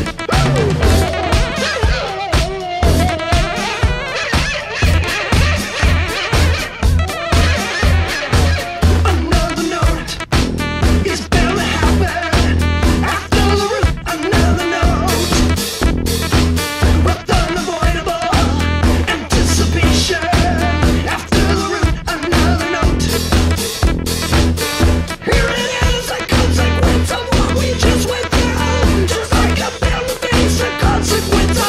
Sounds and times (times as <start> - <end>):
Swing music: 0.0 - 31.6.